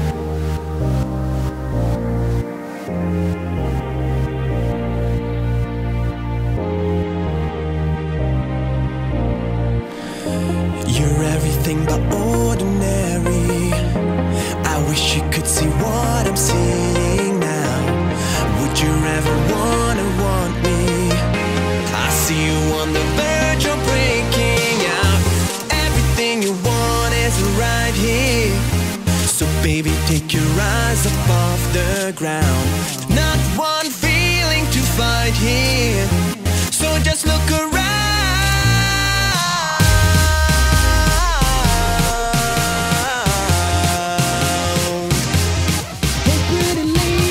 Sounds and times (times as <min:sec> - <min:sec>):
Soundtrack music: 0:00.0 - 0:47.3.